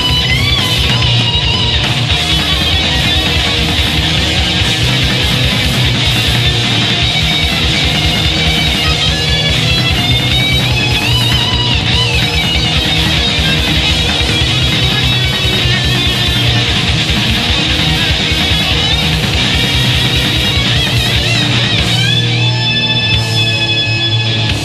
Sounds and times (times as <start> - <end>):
Heavy metal: 0.0 - 24.6.